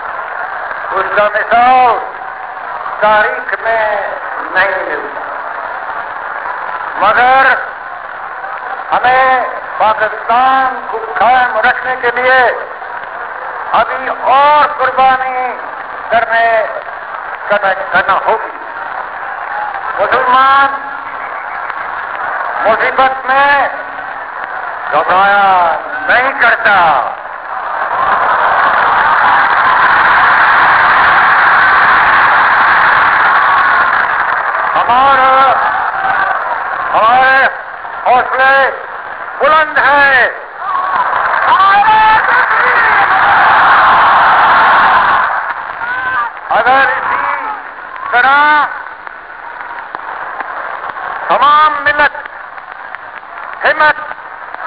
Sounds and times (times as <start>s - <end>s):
Male speech, man speaking: 0.9s - 2.1s, 3.0s - 5.1s, 7.0s - 7.6s, 8.9s - 12.7s, 13.8s - 16.8s, 17.5s - 18.5s, 20.0s - 20.9s, 22.6s - 23.8s, 25.0s - 27.1s, 34.8s - 35.6s, 37.0s - 38.8s, 39.4s - 40.4s, 41.5s - 43.2s, 46.5s - 48.7s, 51.3s - 52.2s, 53.6s - 54.1s.